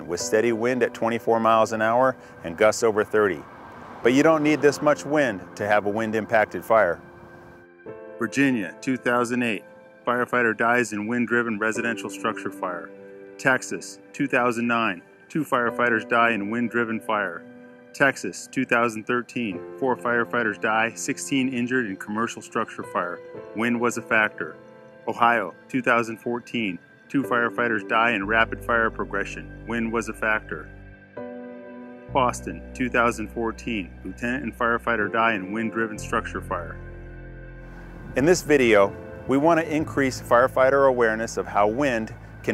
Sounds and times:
Speech: 0.0s - 3.4s, 4.1s - 7.0s, 8.2s - 17.4s, 18.0s - 30.7s, 32.1s - 36.8s, 38.2s - 42.5s
Music: 0.0s - 42.5s.

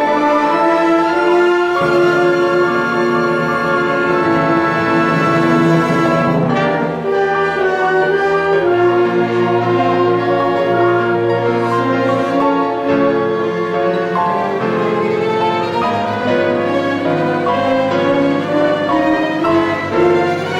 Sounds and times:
Inside, large room or hall: 0.0s - 20.5s
Keyboard (musical): 0.0s - 20.5s
Orchestra: 0.0s - 20.5s.

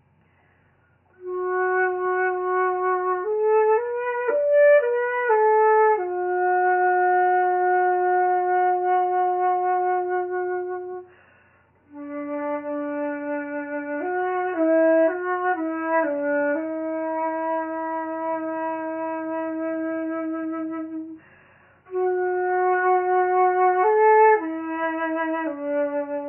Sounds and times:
Flute: 1.1s - 11.2s, 11.8s - 26.2s.

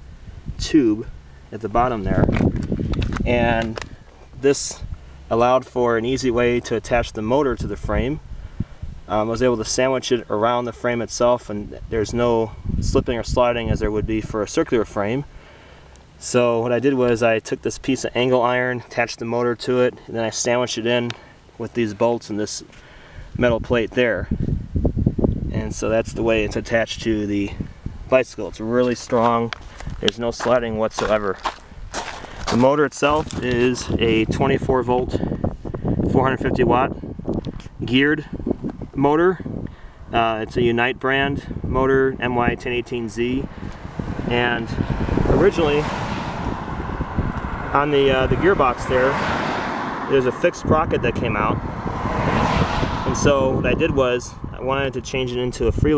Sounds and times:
Speech: 0.6s - 2.4s, 3.2s - 3.8s, 4.4s - 8.2s, 9.1s - 15.3s, 16.2s - 22.7s, 23.4s - 24.4s, 25.5s - 31.5s, 32.5s - 35.3s, 36.1s - 37.0s, 37.8s - 38.3s, 39.0s - 39.5s, 40.1s - 43.5s, 44.2s - 45.9s, 47.7s - 49.3s, 50.1s - 51.6s, 53.1s - 55.9s.

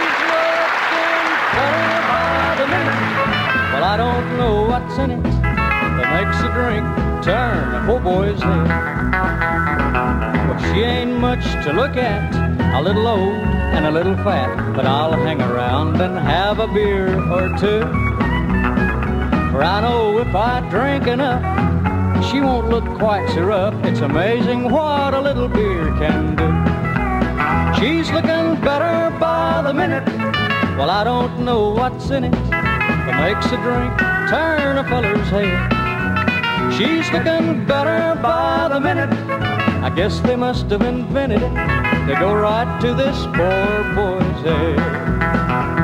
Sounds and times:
Country: 0.0s - 45.8s.

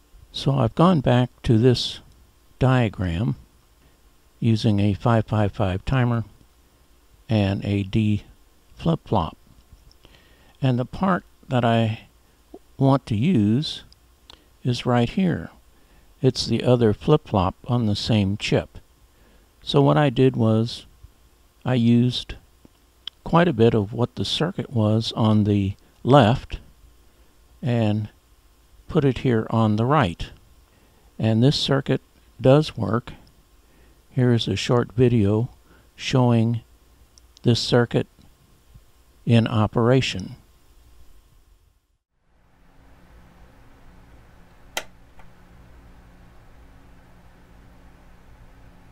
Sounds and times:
Speech: 0.3s - 3.4s, 4.4s - 6.3s, 7.3s - 9.4s, 10.6s - 13.9s, 14.6s - 15.6s, 16.2s - 18.8s, 19.6s - 20.9s, 21.6s - 22.4s, 23.1s - 26.7s, 27.6s - 28.2s, 28.9s - 30.4s, 31.2s - 33.2s, 34.1s - 36.7s, 37.4s - 38.1s, 39.2s - 40.4s.

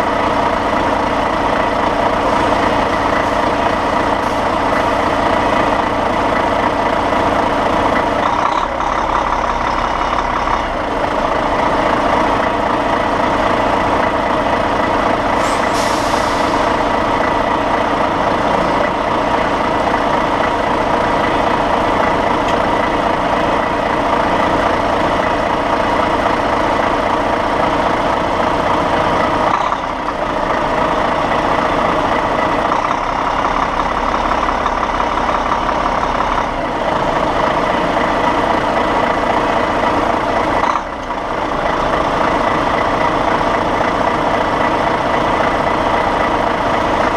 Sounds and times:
Vehicle: 0.0s - 47.1s.

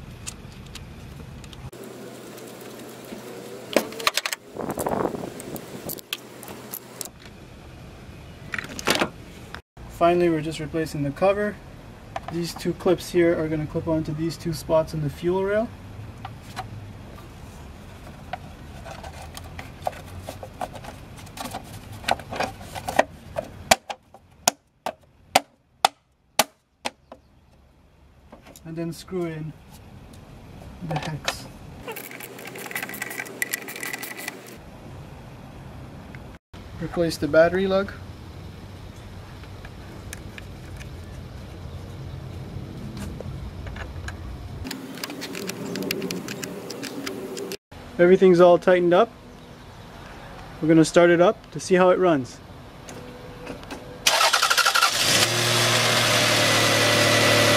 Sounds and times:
Speech: 9.9s - 11.6s, 12.3s - 15.8s, 28.6s - 29.6s, 30.8s - 31.5s, 36.8s - 38.0s, 48.0s - 49.2s, 50.6s - 52.4s.

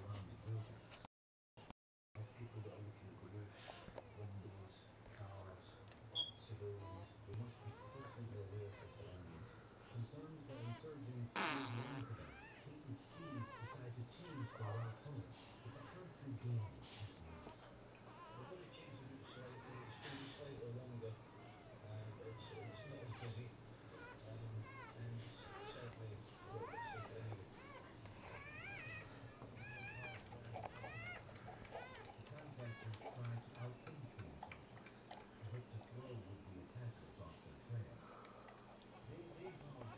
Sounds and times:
Speech: 0.0s - 1.1s, 2.2s - 39.9s.

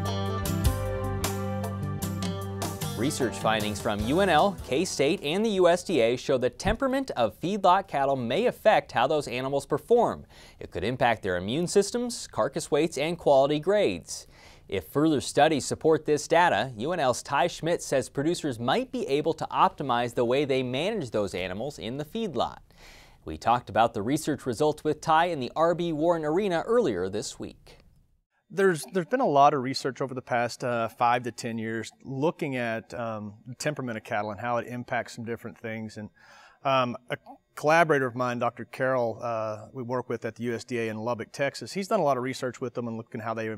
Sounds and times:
Speech: 3.0s - 22.6s, 23.3s - 27.8s, 28.5s - 43.5s.

